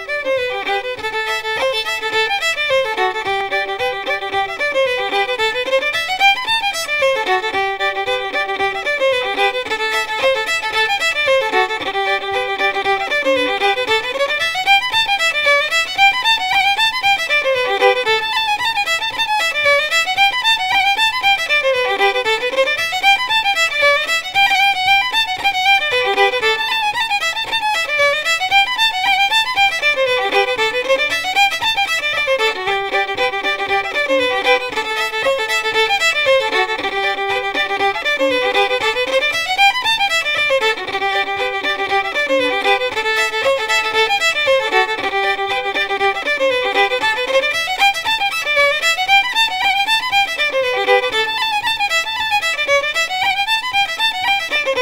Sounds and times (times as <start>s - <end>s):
Violin, fiddle: 0.0s - 54.8s.